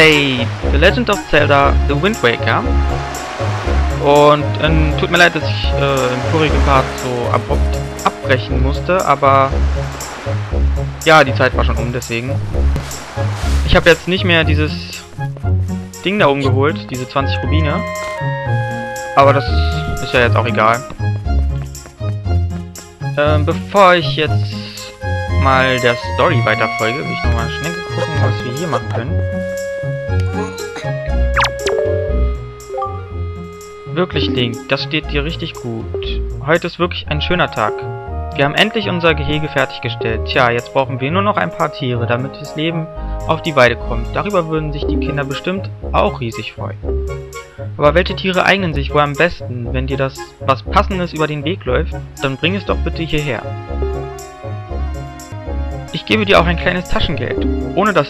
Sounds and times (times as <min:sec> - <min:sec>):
Speech: 0:00.0 - 0:02.7, 0:04.0 - 0:09.6, 0:11.0 - 0:12.4, 0:13.7 - 0:15.1, 0:16.0 - 0:17.9, 0:19.2 - 0:21.0, 0:23.2 - 0:29.2, 0:33.9 - 0:46.8, 0:47.8 - 0:53.5, 0:56.0 - 0:58.0
Music: 0:00.0 - 0:58.0.